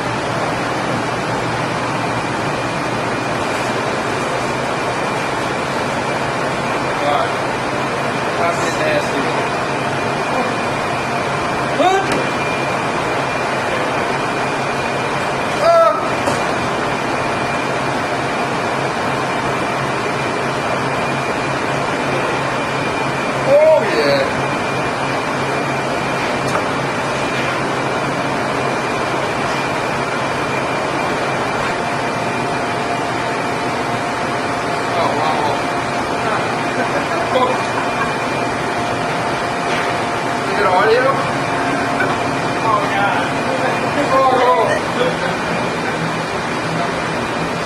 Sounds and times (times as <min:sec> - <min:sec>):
Speech: 0:08.4 - 0:09.5, 0:23.4 - 0:24.4, 0:34.9 - 0:35.7, 0:40.4 - 0:41.3, 0:42.6 - 0:45.2.